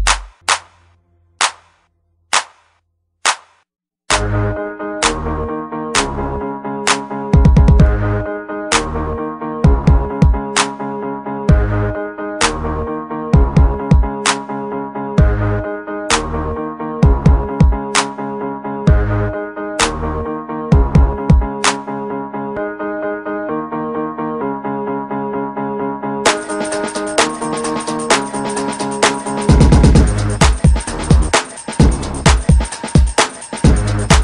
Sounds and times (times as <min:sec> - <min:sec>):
Background music: 0:04.1 - 0:34.2.